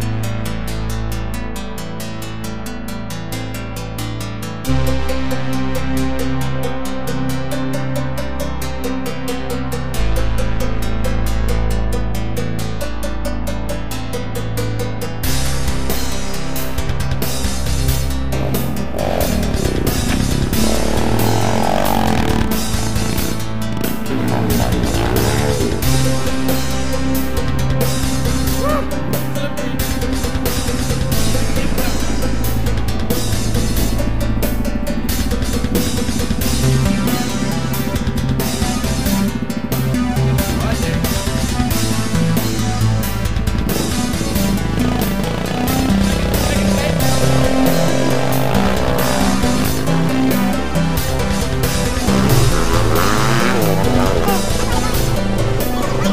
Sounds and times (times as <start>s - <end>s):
Music: 0.0s - 56.1s
Vehicle: 15.2s - 56.1s.